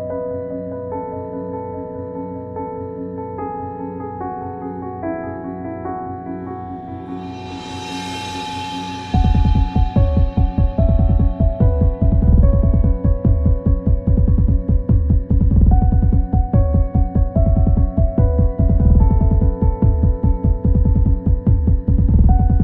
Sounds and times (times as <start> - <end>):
Music: 0.0 - 22.6.